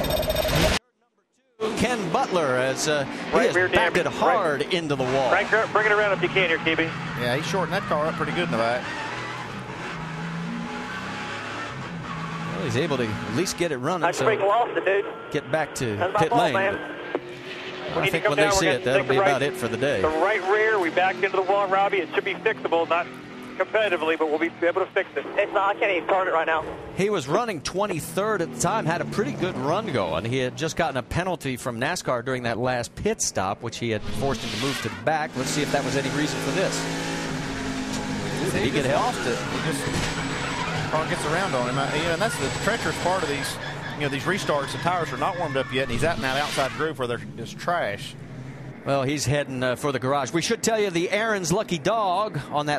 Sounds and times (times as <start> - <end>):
Speech: 1.6 - 8.8, 12.6 - 16.8, 17.9 - 36.8, 38.4 - 39.9, 40.9 - 48.1, 48.9 - 52.7.